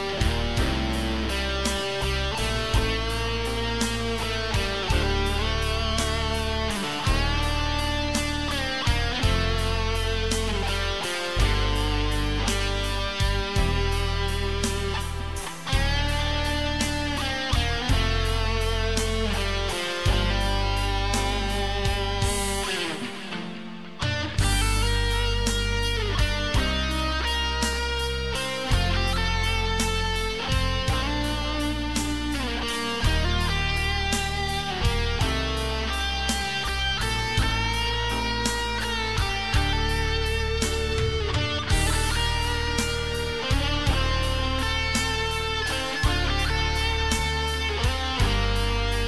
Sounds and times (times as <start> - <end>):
Guitar: 0.0 - 49.0.